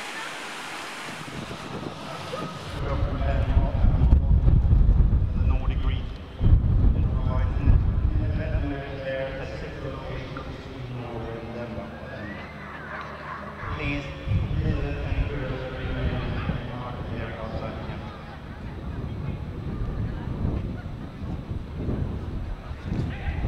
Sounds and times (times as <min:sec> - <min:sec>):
Speech: 0:02.0 - 0:04.3, 0:05.3 - 0:06.1, 0:06.9 - 0:23.4.